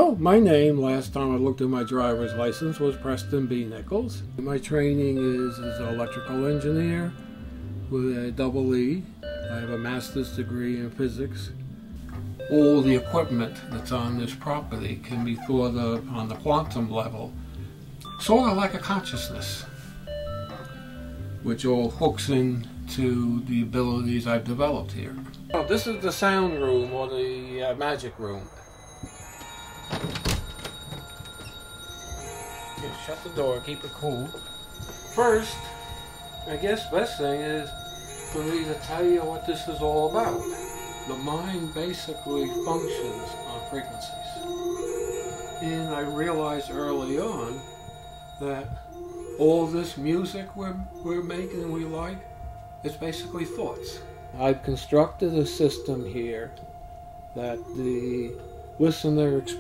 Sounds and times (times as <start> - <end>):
Speech: 0.0 - 7.2, 7.9 - 11.6, 12.5 - 17.3, 18.1 - 19.7, 21.4 - 28.5, 32.8 - 34.3, 36.5 - 37.7, 38.4 - 40.5, 41.1 - 44.3, 45.6 - 47.6, 48.4 - 48.8, 49.4 - 52.2, 52.9 - 56.6, 57.4 - 59.6
Music: 0.0 - 59.6.